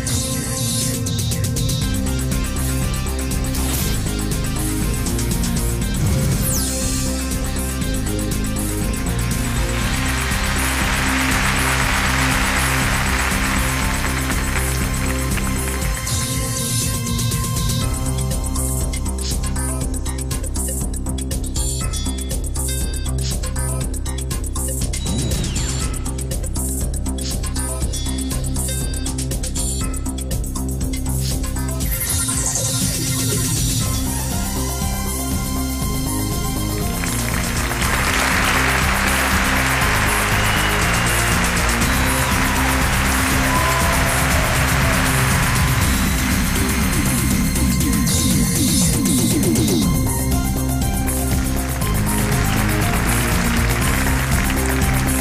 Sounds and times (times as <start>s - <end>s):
Music: 0.0s - 55.2s.